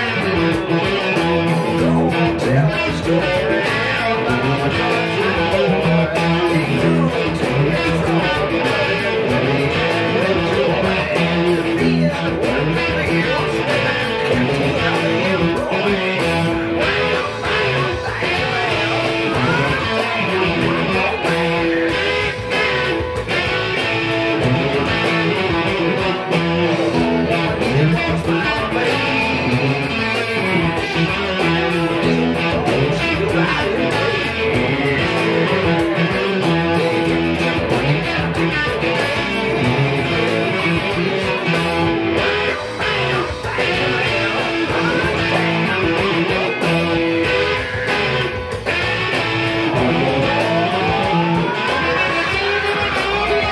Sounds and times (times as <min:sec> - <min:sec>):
Music: 0:00.0 - 0:53.5.